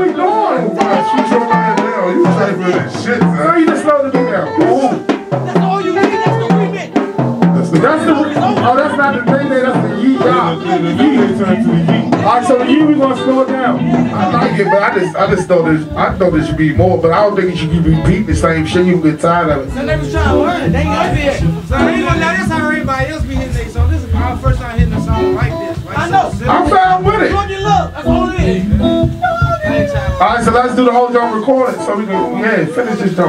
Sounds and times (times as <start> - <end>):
Speech: 0.0 - 28.7, 29.4 - 33.2
Music: 0.0 - 33.2.